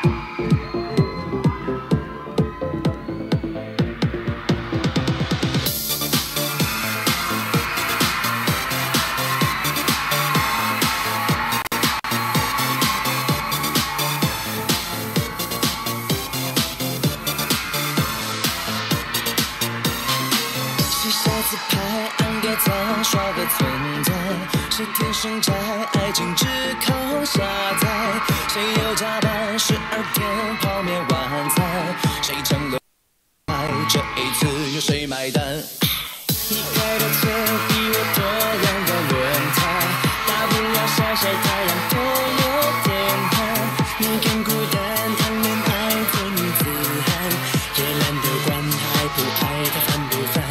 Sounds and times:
Soundtrack music: 0.0 - 32.8, 36.3 - 50.5.

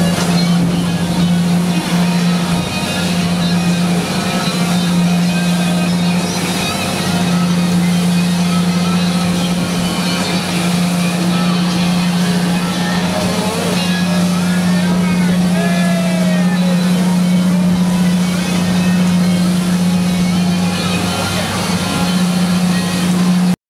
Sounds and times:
Music: 0.0 - 23.5
Motorboat, speedboat: 0.0 - 23.6
Speech: 10.2 - 23.0.

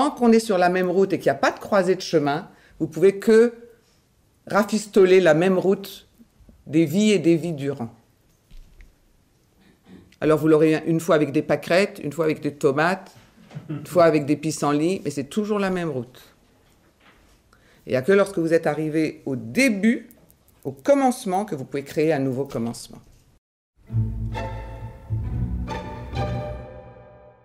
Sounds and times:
Speech: 0.0 - 3.7, 4.5 - 6.1, 6.7 - 8.0, 10.2 - 16.4, 17.9 - 23.1.

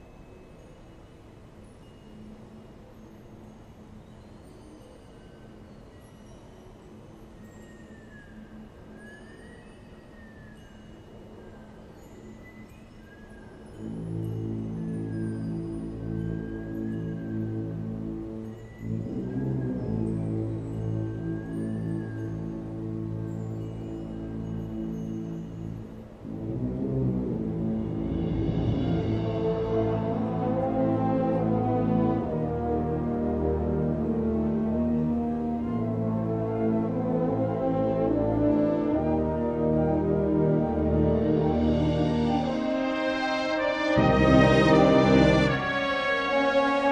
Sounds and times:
Music: 0.0 - 46.9.

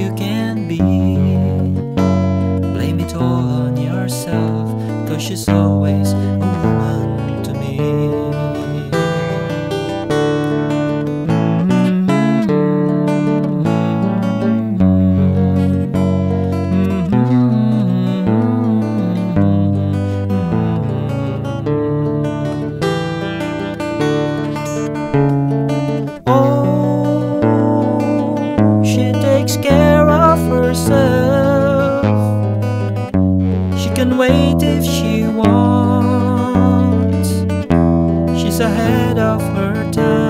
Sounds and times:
Acoustic guitar: 0.0 - 40.2.

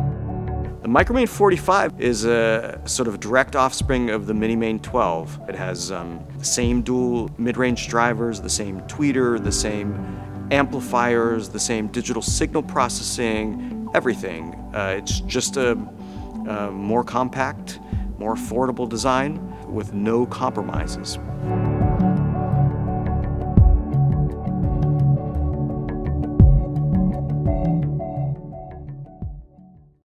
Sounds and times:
Music: 0.0 - 30.0
Speech: 0.8 - 21.2.

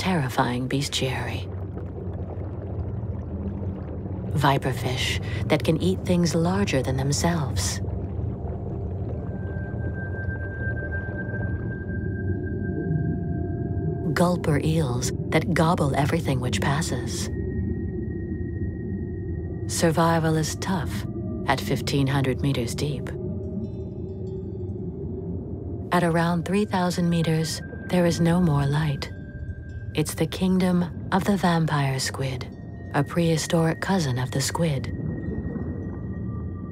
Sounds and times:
Speech: 0.0 - 1.5, 4.4 - 7.8, 14.1 - 17.3, 19.7 - 23.2, 26.0 - 29.1, 30.0 - 34.9
Music: 5.2 - 36.7.

